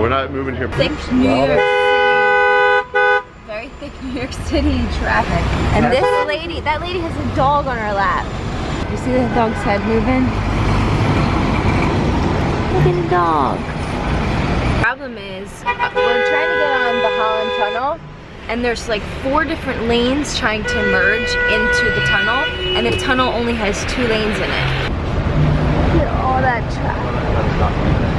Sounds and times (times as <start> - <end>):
Vehicle: 0.0 - 28.1.